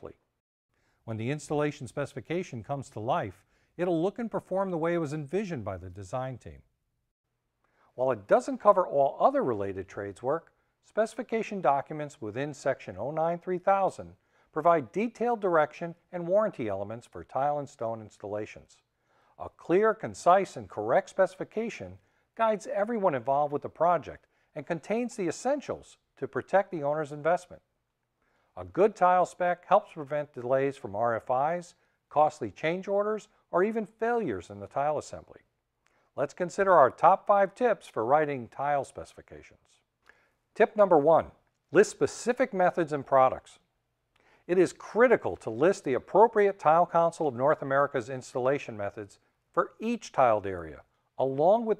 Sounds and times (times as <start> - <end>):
Speech: 0.0 - 0.2, 1.0 - 6.7, 8.0 - 27.7, 28.6 - 35.5, 36.2 - 39.9, 40.6 - 43.7, 44.5 - 51.7.